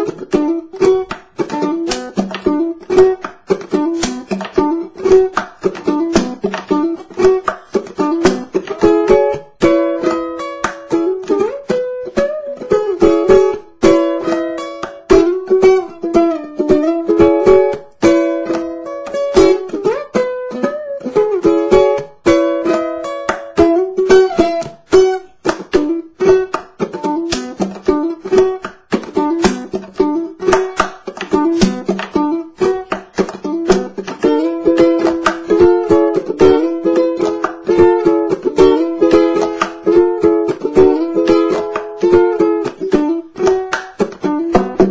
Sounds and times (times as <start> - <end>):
Inside, small room: 0.0 - 44.9
Ukulele: 0.0 - 44.9.